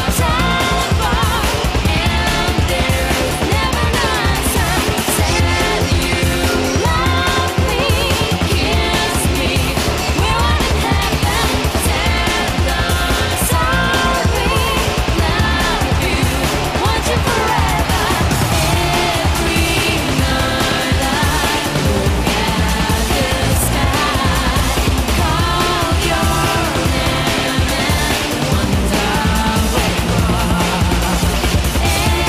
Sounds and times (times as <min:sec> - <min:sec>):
Music: 0:00.0 - 0:32.2.